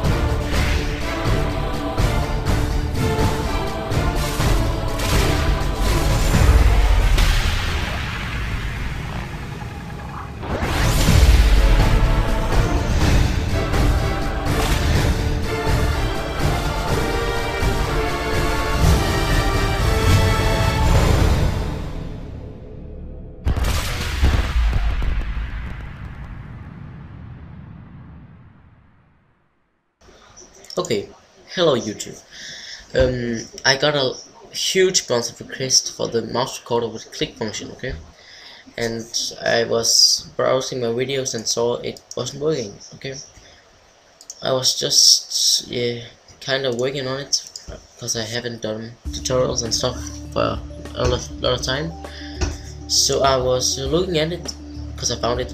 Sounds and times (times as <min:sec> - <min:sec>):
Music: 0:00.0 - 0:08.0, 0:10.6 - 0:23.7, 0:49.1 - 0:55.5.